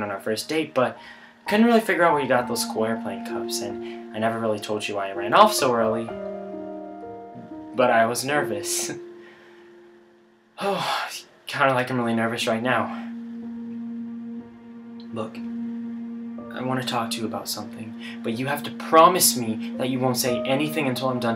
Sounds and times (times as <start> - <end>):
Speech: 0.0 - 6.1, 7.8 - 9.0, 10.6 - 13.1, 16.6 - 21.3
Music: 0.0 - 21.3.